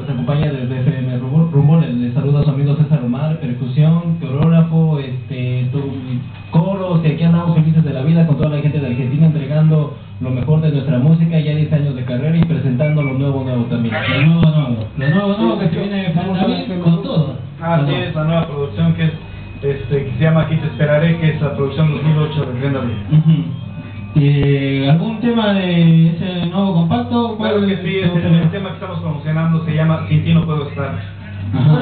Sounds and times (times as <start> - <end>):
Speech: 0.0 - 23.6, 24.2 - 31.8
Music: 5.1 - 31.8
Radio: 12.8 - 16.7, 18.4 - 26.6.